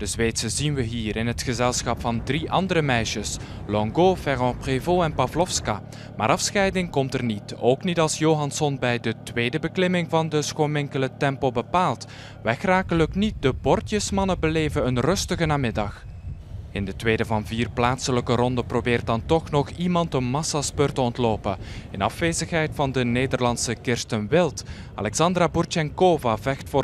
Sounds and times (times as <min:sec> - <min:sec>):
Speech: 0:00.0 - 0:16.0, 0:16.8 - 0:26.8
Vehicle: 0:00.0 - 0:26.8.